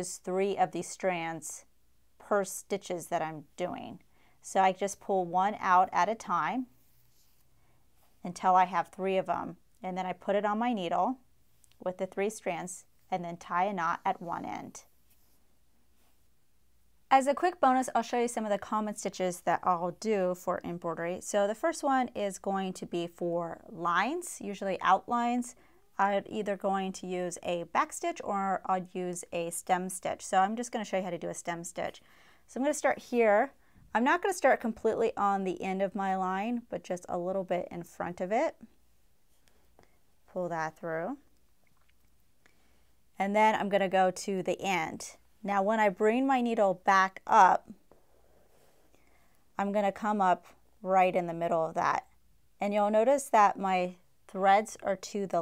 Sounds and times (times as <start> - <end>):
Speech: 0.0 - 6.7, 8.2 - 11.2, 11.8 - 14.9, 17.1 - 38.7, 40.3 - 41.3, 43.2 - 47.8, 49.6 - 55.4
Inside, small room: 0.0 - 55.4.